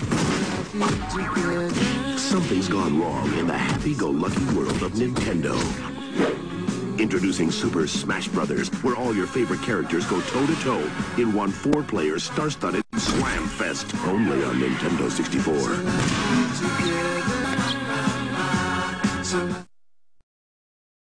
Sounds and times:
Music: 0.0 - 19.7
Speech: 0.8 - 5.9, 7.0 - 15.9.

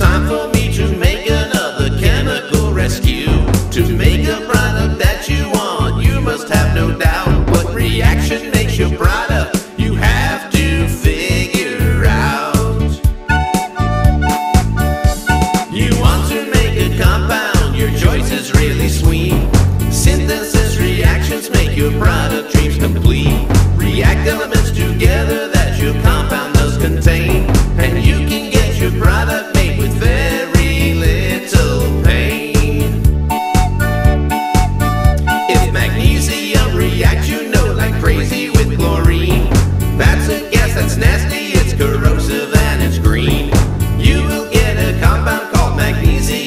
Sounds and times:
Music: 0.0 - 46.4.

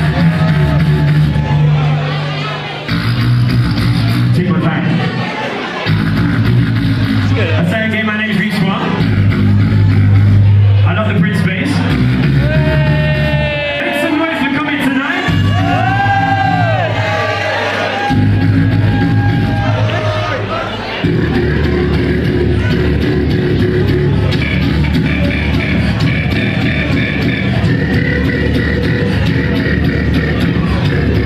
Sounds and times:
Beatboxing: 0.0 - 2.0, 2.7 - 5.1, 5.8 - 31.2.

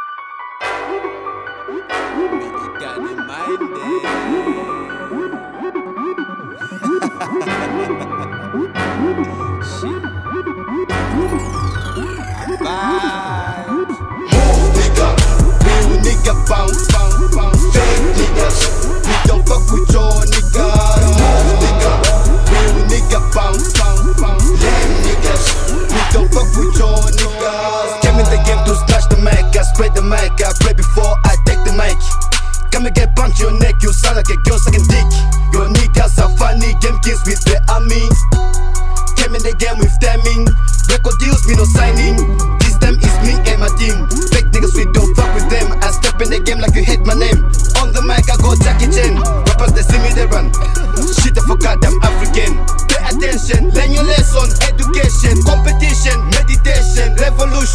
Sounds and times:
Dance music: 0.6 - 57.7.

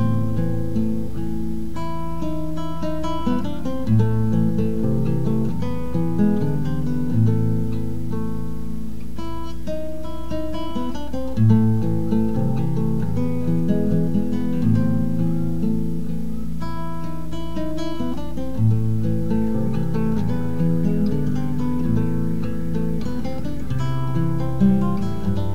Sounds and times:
Acoustic guitar: 0.0 - 25.5
Strum: 0.0 - 25.5.

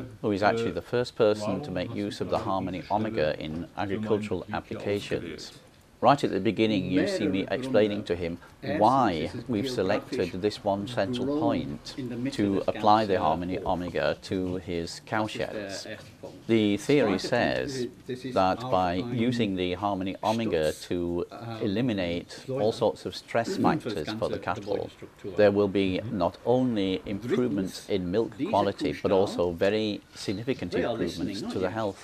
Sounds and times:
Speech: 0.0 - 32.0.

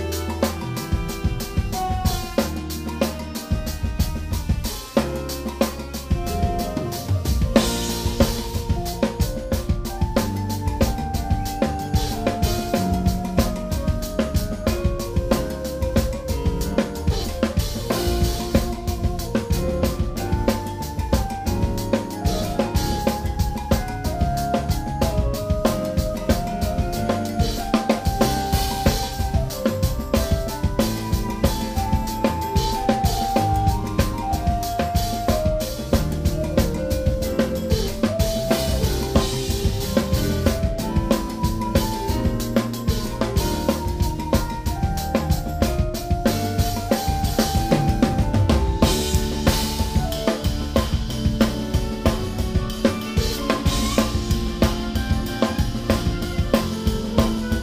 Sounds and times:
Drum kit: 0.0 - 57.6
Jazz: 0.0 - 57.6.

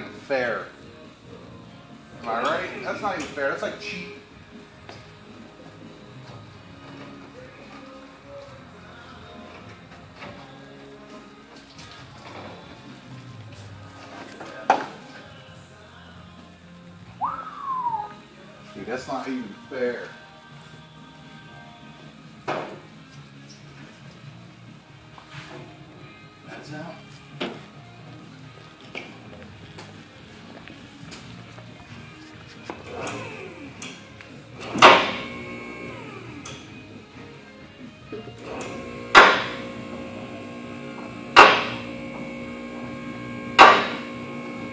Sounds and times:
Music: 0.0 - 44.7.

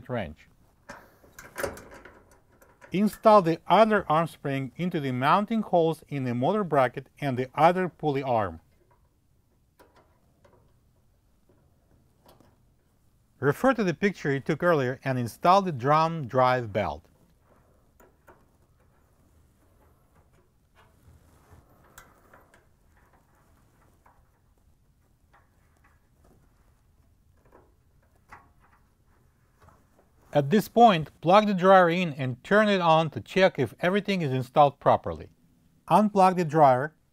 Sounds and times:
Speech: 0.0 - 0.5, 3.0 - 8.6, 13.4 - 17.1, 30.3 - 35.3, 35.9 - 37.0.

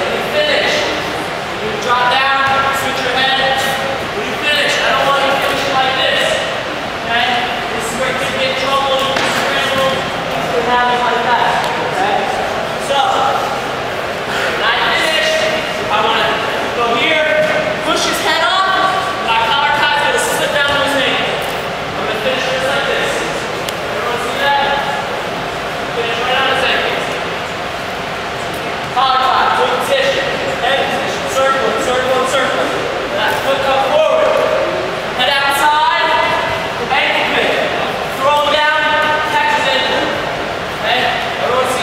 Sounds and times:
Speech: 0.0 - 25.1, 25.9 - 27.3, 28.9 - 41.8
Inside, large room or hall: 0.0 - 41.8.

